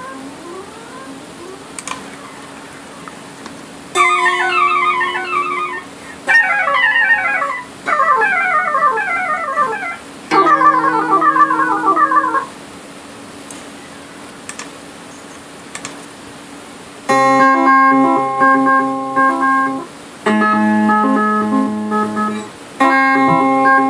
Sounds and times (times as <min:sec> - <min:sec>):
Theremin: 0:00.0 - 0:03.4, 0:04.0 - 0:12.5
Guitar: 0:00.0 - 0:12.6, 0:17.1 - 0:23.8
Effects unit: 0:03.9 - 0:12.5, 0:17.1 - 0:23.8.